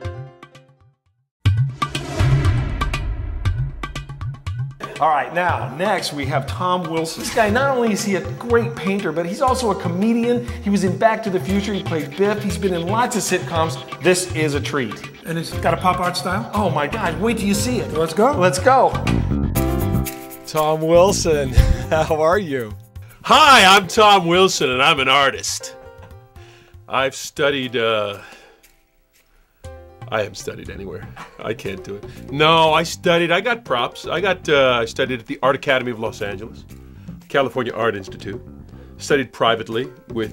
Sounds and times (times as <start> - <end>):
Music: 0.0 - 40.3
Speech: 4.8 - 19.0, 20.5 - 25.8, 26.9 - 28.2, 30.1 - 36.6, 37.3 - 38.4, 39.0 - 40.3.